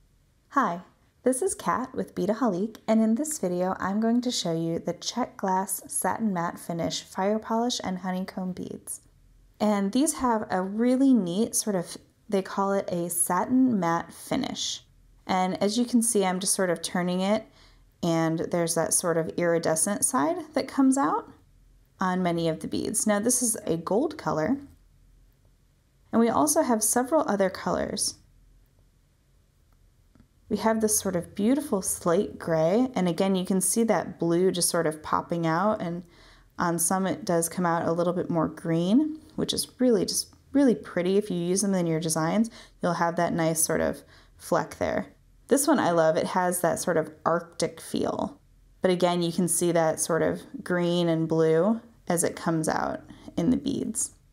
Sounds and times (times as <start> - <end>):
Speech: 0.6 - 9.0, 9.6 - 21.4, 22.0 - 24.7, 26.1 - 28.2, 30.5 - 54.2.